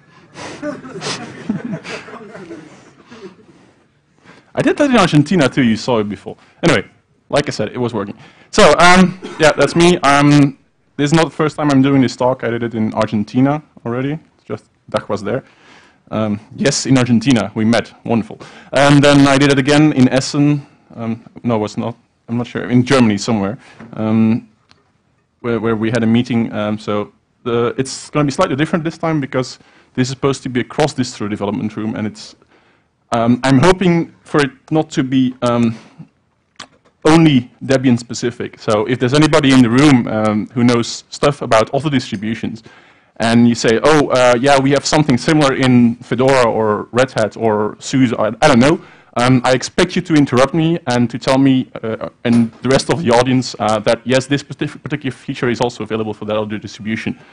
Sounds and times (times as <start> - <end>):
Speech: 4.6 - 15.4, 16.1 - 24.5, 25.4 - 32.4, 33.1 - 35.8, 37.0 - 42.6, 43.2 - 57.2.